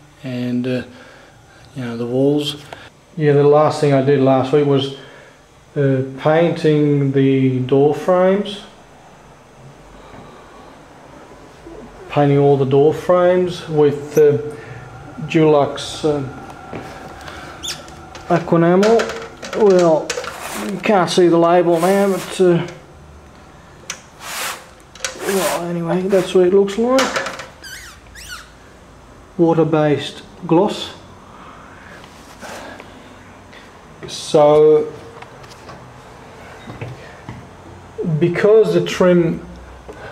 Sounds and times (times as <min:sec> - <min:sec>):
Speech: 0:00.2 - 0:01.0, 0:01.7 - 0:05.0, 0:05.8 - 0:08.7, 0:11.6 - 0:14.6, 0:15.2 - 0:16.4, 0:18.3 - 0:22.8, 0:25.1 - 0:27.2, 0:29.4 - 0:31.1, 0:34.0 - 0:35.1, 0:38.0 - 0:39.6.